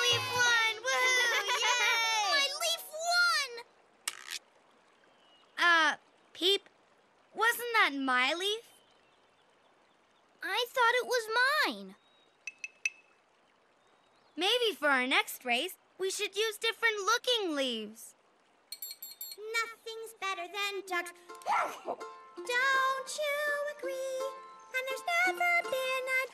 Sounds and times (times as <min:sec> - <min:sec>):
Music: 0:00.0 - 0:00.5, 0:20.8 - 0:26.3
Speech: 0:00.0 - 0:03.6, 0:05.6 - 0:06.6, 0:07.4 - 0:08.7, 0:10.4 - 0:12.0, 0:14.4 - 0:18.1, 0:19.4 - 0:22.0.